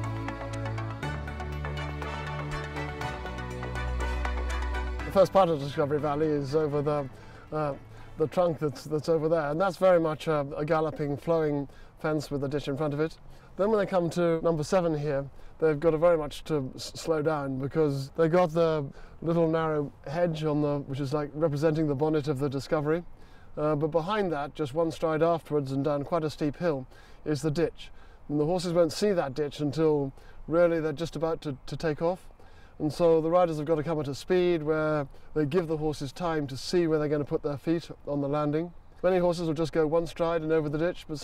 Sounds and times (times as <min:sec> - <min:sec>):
Speech: 0:05.1 - 0:41.2.